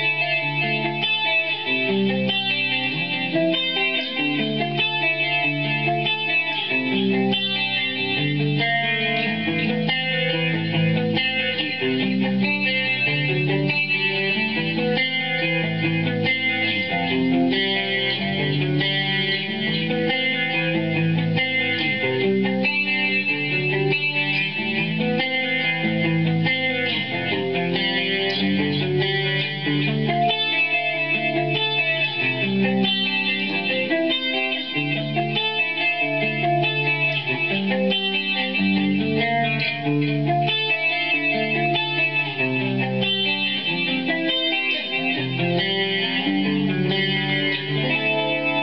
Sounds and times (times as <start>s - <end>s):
Electric guitar: 0.0s - 48.6s.